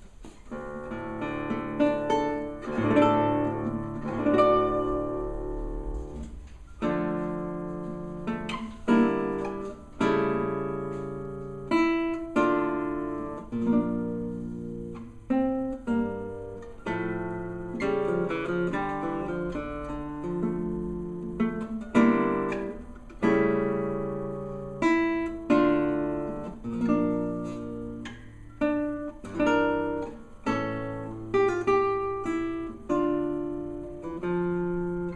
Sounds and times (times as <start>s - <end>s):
Acoustic guitar: 0.0s - 35.1s
Strum: 0.0s - 35.1s.